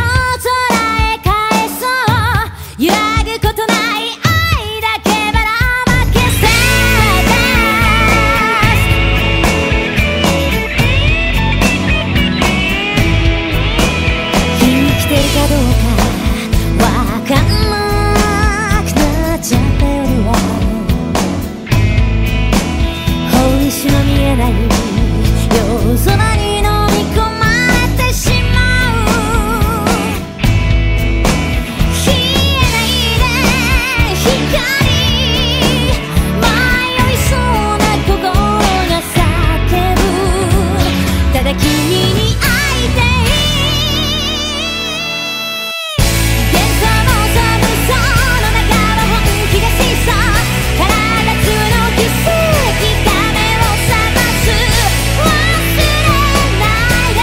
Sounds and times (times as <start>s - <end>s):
Music: 0.0s - 57.2s.